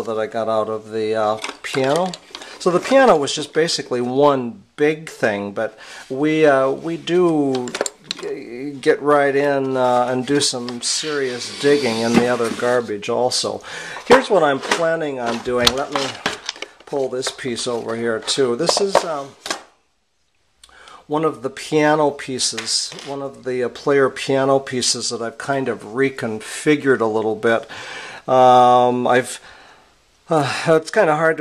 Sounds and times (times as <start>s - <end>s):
Speech: 0.0s - 19.4s, 20.9s - 29.4s, 30.3s - 31.4s
Inside, small room: 0.0s - 31.4s.